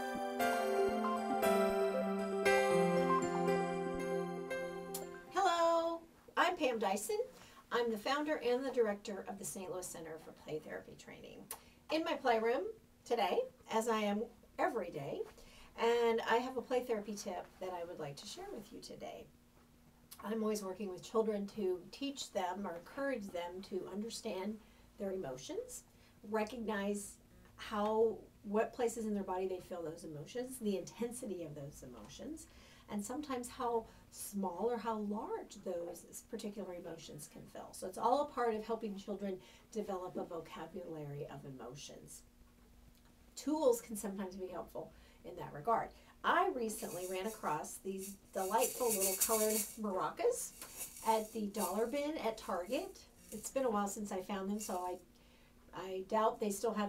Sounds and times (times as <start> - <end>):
Speech: 5.4 - 19.3, 20.2 - 42.3, 43.4 - 55.0, 55.7 - 56.8.